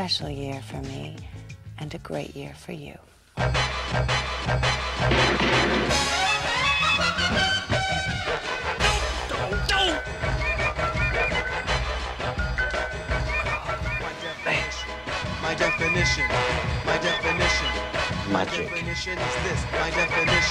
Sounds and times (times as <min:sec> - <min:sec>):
Television: 0:00.0 - 0:03.7, 0:13.2 - 0:20.5
Music: 0:00.0 - 0:20.5.